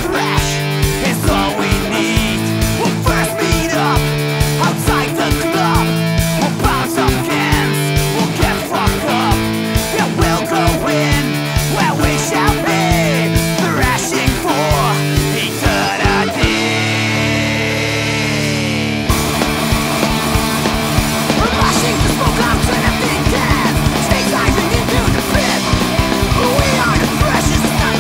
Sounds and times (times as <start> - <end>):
Music: 0.0 - 28.0.